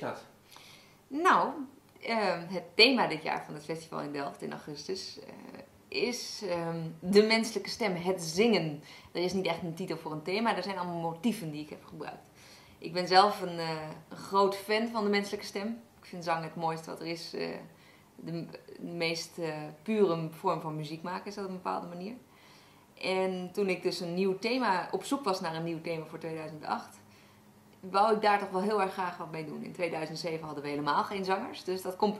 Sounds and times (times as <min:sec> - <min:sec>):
Speech: 0:00.0 - 0:00.3, 0:01.1 - 0:12.2, 0:12.8 - 0:22.2, 0:23.0 - 0:27.0, 0:27.8 - 0:32.1.